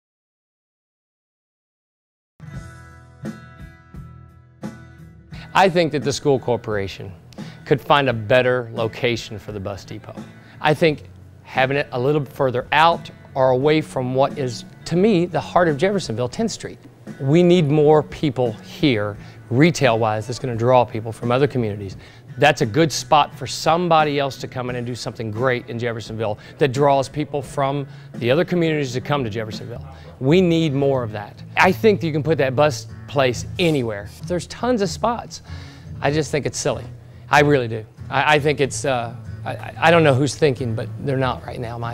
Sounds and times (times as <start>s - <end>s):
Speech: 5.5s - 35.4s, 36.0s - 41.9s.